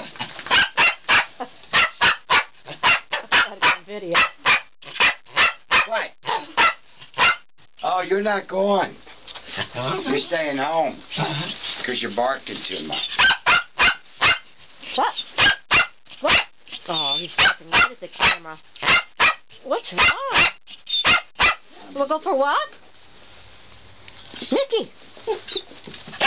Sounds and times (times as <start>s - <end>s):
Bark: 0.5s - 7.4s, 13.2s - 14.5s, 15.4s - 16.5s, 17.4s - 21.6s.